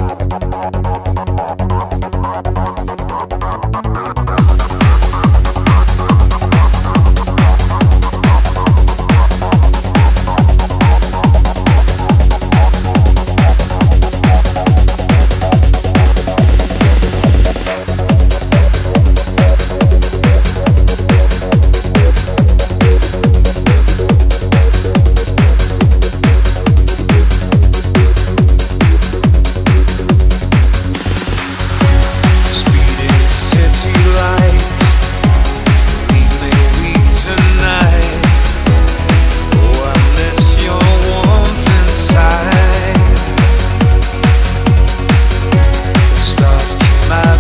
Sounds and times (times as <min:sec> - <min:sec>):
Techno: 0:00.0 - 0:47.4.